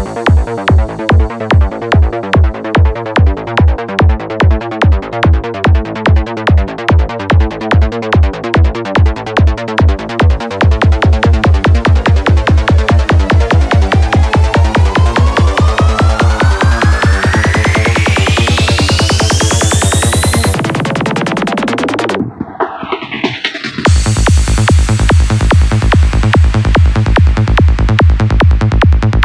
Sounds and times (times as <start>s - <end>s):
Music: 0.0s - 29.2s.